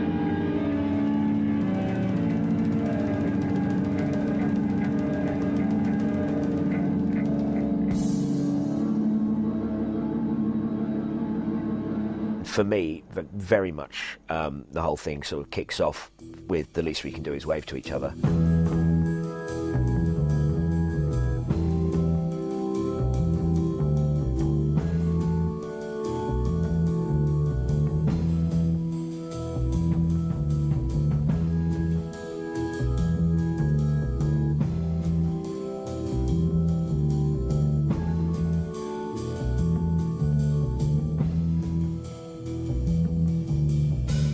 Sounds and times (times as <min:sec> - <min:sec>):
Speech: 0:12.4 - 0:18.3.